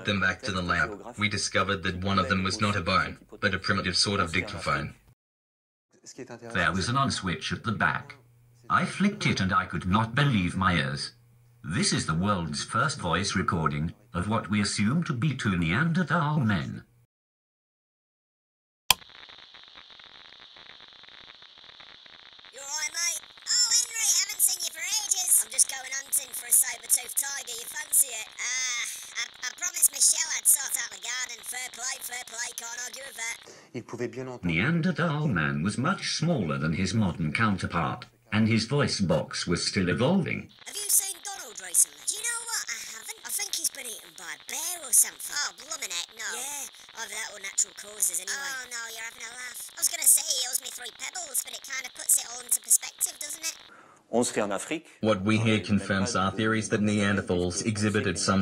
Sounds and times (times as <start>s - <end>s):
Speech: 0.0s - 5.0s, 6.0s - 16.9s, 22.6s - 58.4s.